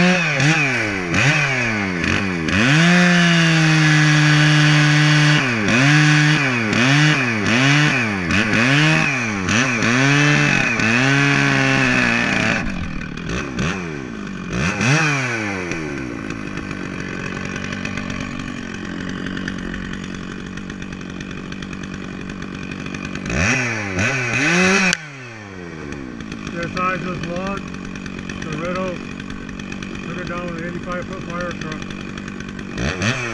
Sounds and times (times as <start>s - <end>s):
Chainsaw: 0.0s - 33.3s.